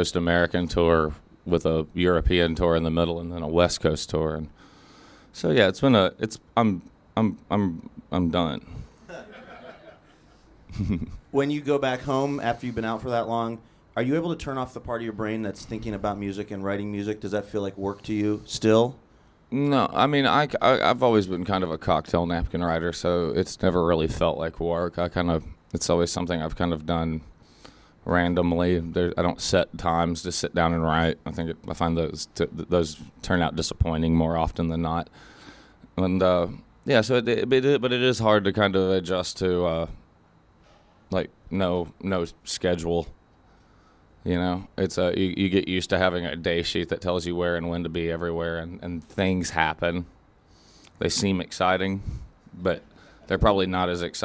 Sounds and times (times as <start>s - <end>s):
Speech: 0.0s - 4.5s, 5.3s - 8.8s, 11.3s - 27.3s, 28.0s - 35.1s, 36.0s - 40.0s, 41.1s - 43.2s, 44.2s - 50.1s, 51.0s - 54.2s.